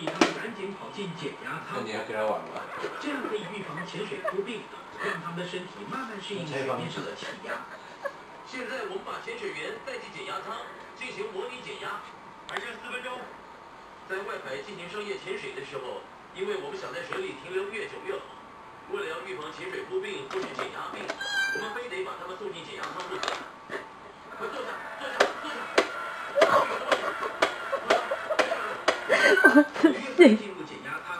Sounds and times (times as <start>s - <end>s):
Speech: 0.0s - 7.6s, 8.5s - 13.4s, 14.1s - 23.4s, 29.8s - 31.1s
Cat: 21.2s - 21.9s.